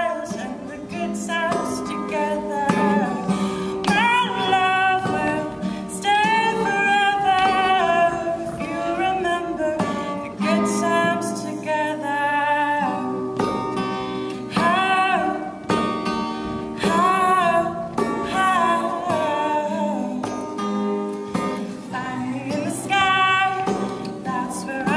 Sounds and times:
Female singing: 0:00.0 - 0:13.2, 0:14.5 - 0:15.6, 0:16.8 - 0:20.4, 0:21.9 - 0:24.9
Music: 0:00.0 - 0:24.9.

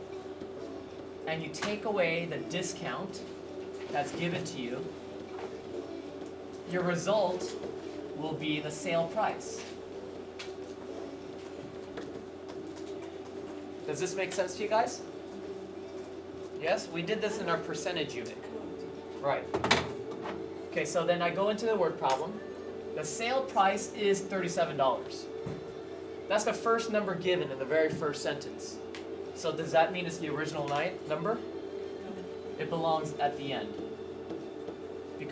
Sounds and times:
Music: 0:00.0 - 0:35.3
Speech: 0:01.3 - 0:03.3, 0:03.9 - 0:05.0, 0:06.7 - 0:07.6, 0:08.2 - 0:09.8, 0:13.9 - 0:15.1, 0:16.6 - 0:18.6, 0:19.2 - 0:19.5, 0:20.8 - 0:22.4, 0:23.0 - 0:25.3, 0:26.3 - 0:28.8, 0:29.4 - 0:31.4, 0:32.6 - 0:33.8.

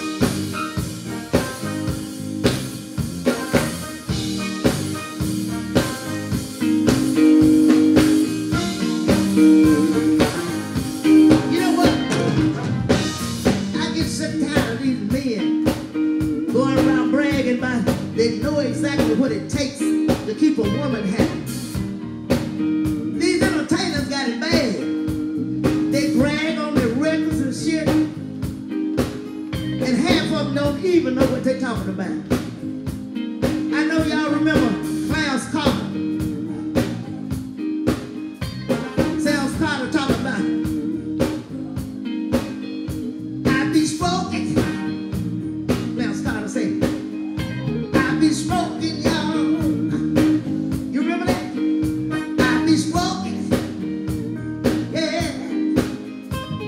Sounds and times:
Music: 0:00.0 - 0:56.6
Speech: 0:11.5 - 0:12.1, 0:13.7 - 0:15.5, 0:16.6 - 0:21.4, 0:23.2 - 0:24.9, 0:25.9 - 0:28.2, 0:29.8 - 0:32.3, 0:33.7 - 0:36.0, 0:39.0 - 0:40.6, 0:43.5 - 0:45.0, 0:46.0 - 0:46.8, 0:48.0 - 0:49.6, 0:50.9 - 0:51.6, 0:52.4 - 0:53.5, 0:54.9 - 0:55.6.

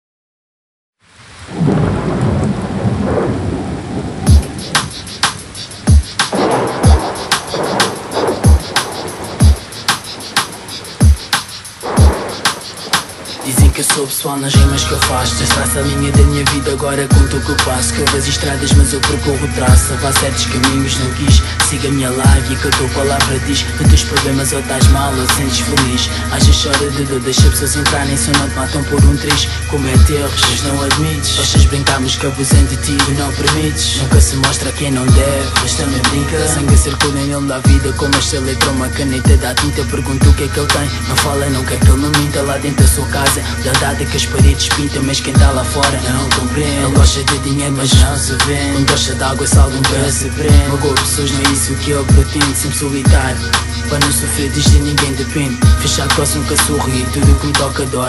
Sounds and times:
Hip hop music: 0:04.3 - 0:58.0.

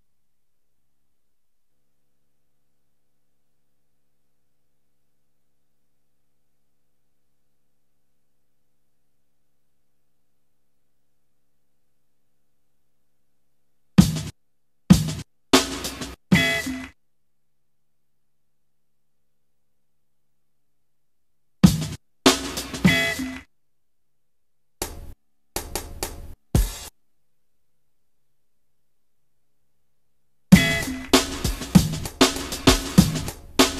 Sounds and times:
Drum roll: 0:14.0 - 0:14.3, 0:14.9 - 0:16.8, 0:21.7 - 0:23.4, 0:30.6 - 0:33.7.

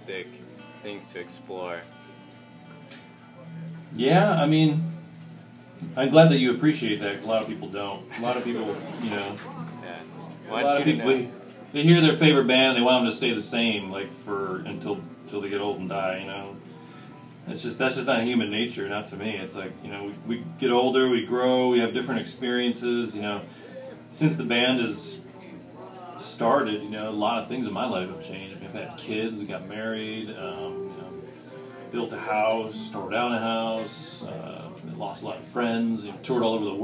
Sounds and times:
Speech: 0:00.0 - 0:01.9, 0:03.3 - 0:05.1, 0:05.8 - 0:16.6, 0:17.5 - 0:23.5, 0:24.1 - 0:31.3, 0:31.9 - 0:36.8.

